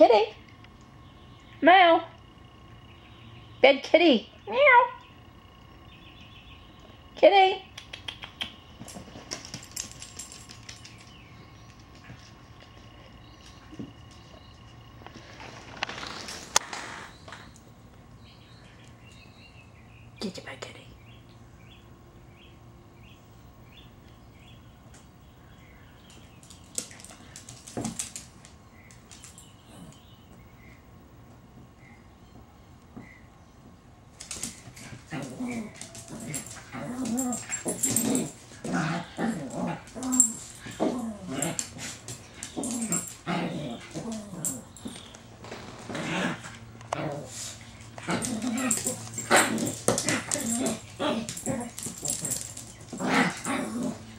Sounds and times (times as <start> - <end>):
Speech: 0.0 - 0.4, 1.6 - 2.2, 3.6 - 5.0, 7.2 - 7.7, 20.2 - 20.9.